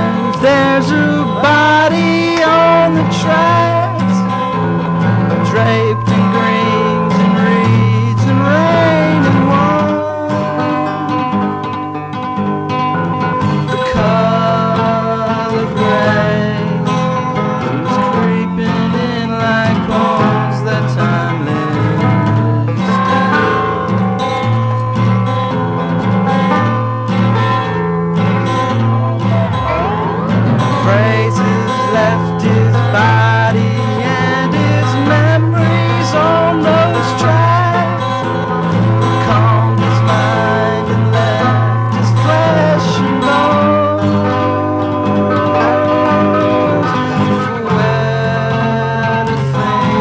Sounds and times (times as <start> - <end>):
Music: 0.0 - 50.0.